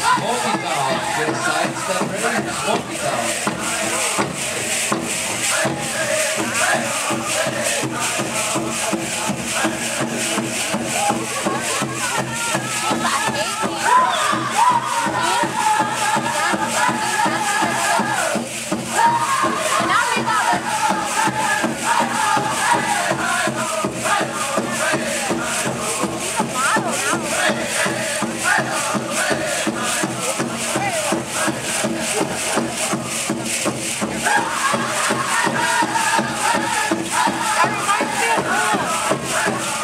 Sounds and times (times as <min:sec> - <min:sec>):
Speech: 0:00.0 - 0:03.5, 0:26.3 - 0:27.9
Music: 0:00.0 - 0:39.8.